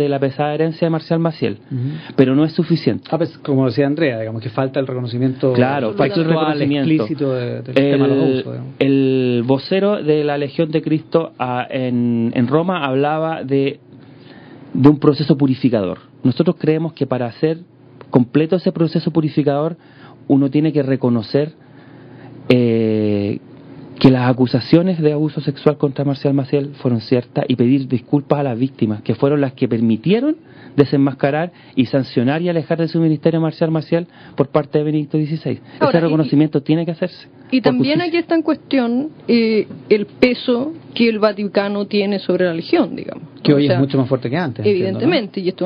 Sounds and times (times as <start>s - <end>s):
Speech: 0.0s - 13.8s, 22.5s - 23.4s, 24.0s - 40.8s, 42.6s - 45.6s.